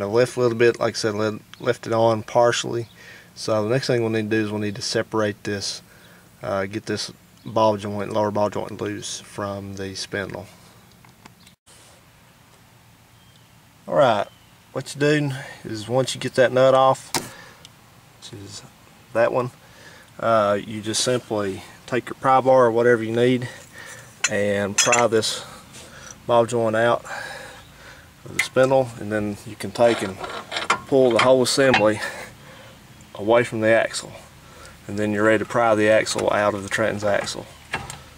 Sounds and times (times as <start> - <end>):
Speech: 0.0 - 5.8, 6.4 - 10.6, 13.9 - 17.1, 18.2 - 19.6, 20.2 - 23.6, 24.2 - 25.5, 26.3 - 27.1, 28.2 - 30.3, 30.9 - 32.3, 33.1 - 37.6
Outside, rural or natural: 0.0 - 38.1.